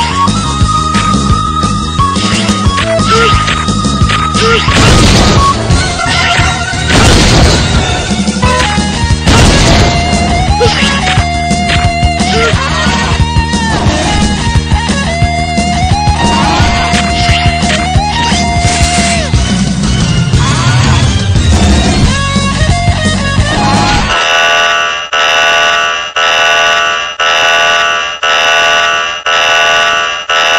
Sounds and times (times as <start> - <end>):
Music: 0.0 - 24.2
Buzzer: 24.2 - 30.5.